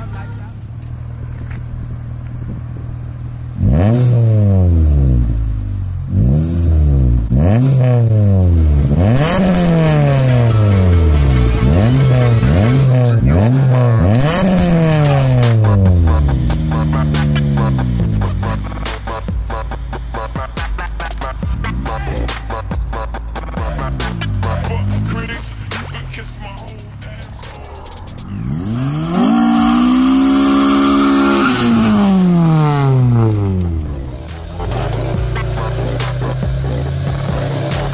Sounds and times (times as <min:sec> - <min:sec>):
Speech: 0:00.0 - 0:00.6, 0:24.5 - 0:28.0
Car: 0:00.0 - 0:37.9
Outside, rural or natural: 0:00.0 - 0:37.9.